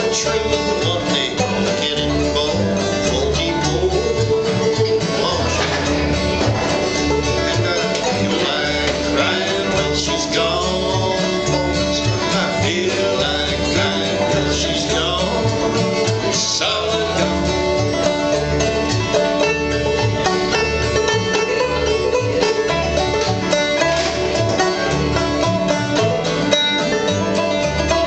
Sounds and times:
Bluegrass: 0.0s - 28.0s.

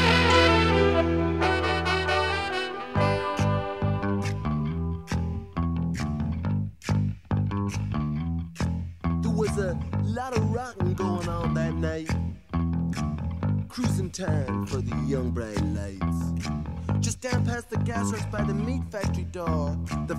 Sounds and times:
Music: 0.0s - 20.1s.

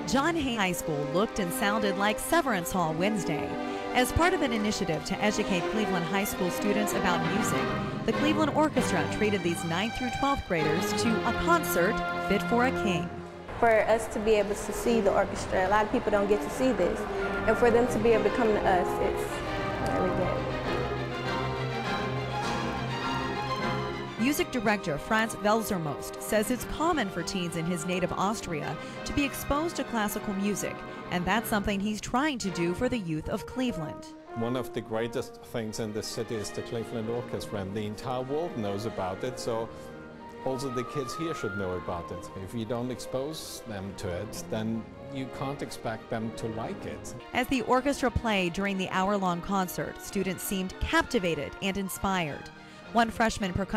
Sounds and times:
Background music: 0.0s - 53.7s
Orchestra: 0.0s - 53.7s
Speech: 0.1s - 19.3s, 24.2s - 39.7s, 40.4s - 52.4s, 53.0s - 53.7s.

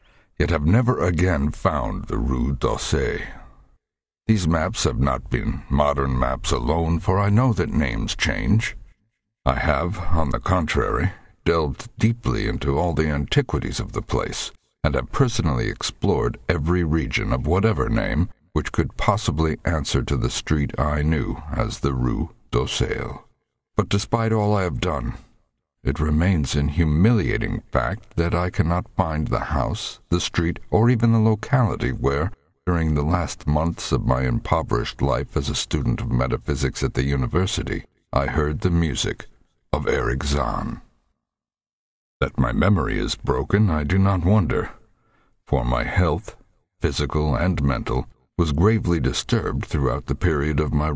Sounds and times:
Speech: 0.4s - 3.6s, 4.3s - 8.8s, 9.5s - 40.9s, 42.2s - 44.8s, 45.5s - 50.9s.

